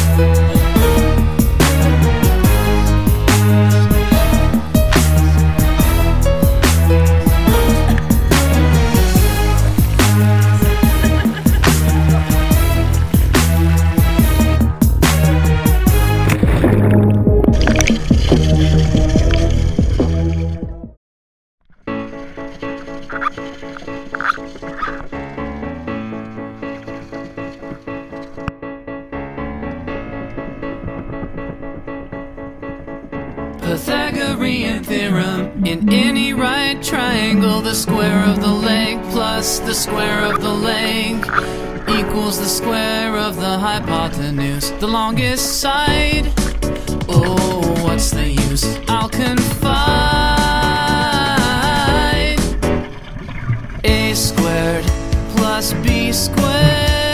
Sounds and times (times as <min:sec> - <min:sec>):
Funk: 0:00.0 - 0:16.7, 0:53.9 - 0:57.1.